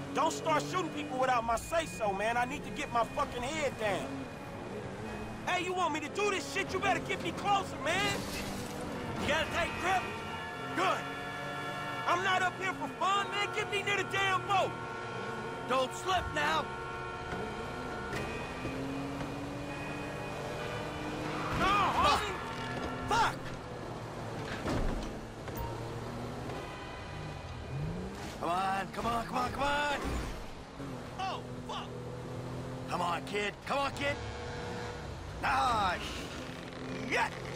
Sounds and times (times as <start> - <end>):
Vehicle: 0.0 - 37.5
Speech: 12.1 - 14.7, 28.4 - 30.0, 32.9 - 34.2, 35.4 - 36.2.